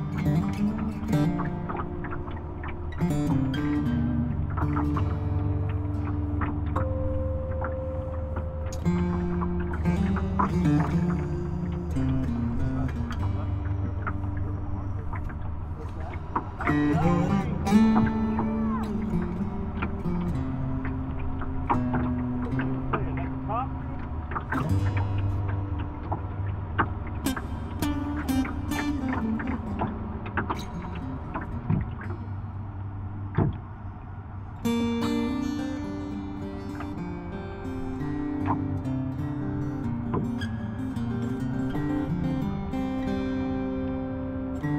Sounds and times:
Music: 0.0s - 44.7s
Speech: 15.8s - 16.2s, 16.9s - 17.8s, 22.9s - 23.7s.

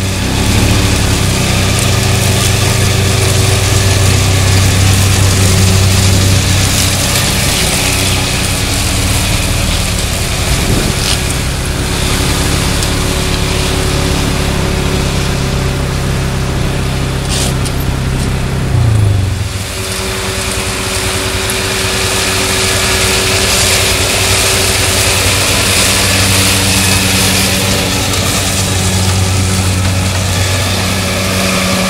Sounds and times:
Outside, rural or natural: 0.0s - 31.8s
Vehicle: 0.0s - 31.8s.

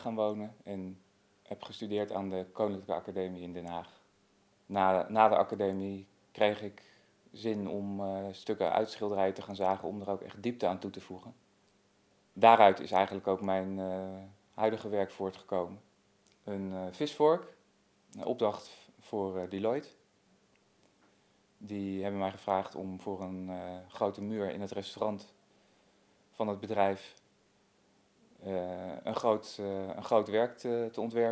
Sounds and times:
Speech: 0.0s - 4.0s, 4.7s - 11.4s, 12.4s - 20.0s, 21.6s - 25.4s, 26.4s - 27.2s, 28.4s - 31.3s.

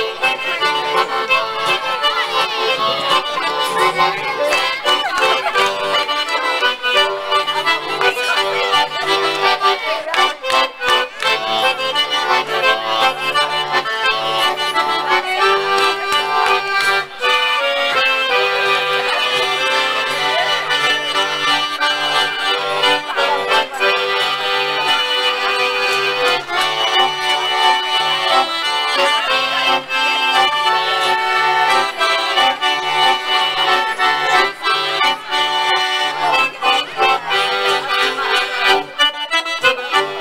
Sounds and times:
Music: 0.0s - 40.2s.

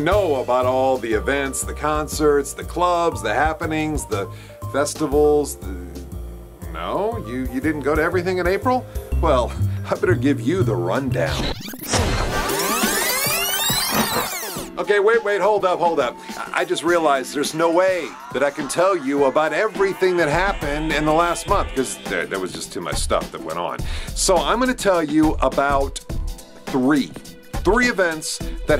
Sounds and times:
Speech: 0.0s - 6.0s, 6.7s - 11.4s, 14.8s - 26.0s, 26.7s - 28.7s
Music: 0.0s - 28.7s.

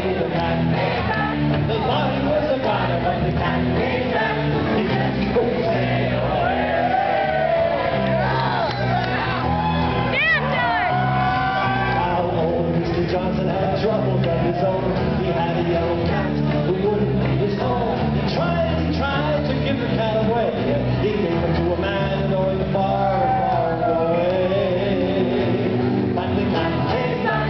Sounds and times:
Music: 0.0s - 27.4s.

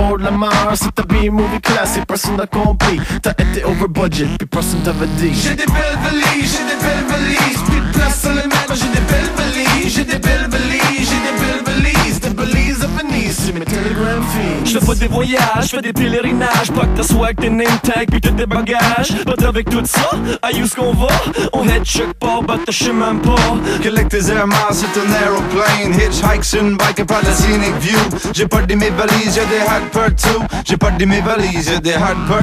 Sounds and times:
Music: 0.0s - 32.4s
Rapping: 0.0s - 32.4s.

